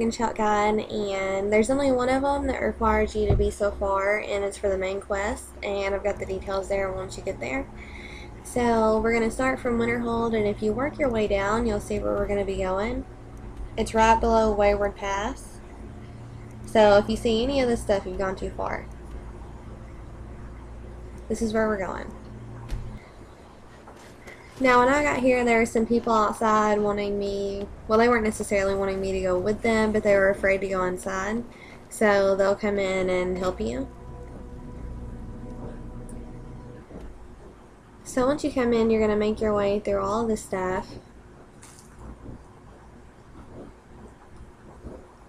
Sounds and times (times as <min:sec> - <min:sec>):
Speech: 0:00.0 - 0:13.0, 0:13.8 - 0:15.6, 0:16.7 - 0:18.9, 0:21.3 - 0:22.2, 0:24.4 - 0:34.0, 0:38.1 - 0:41.0.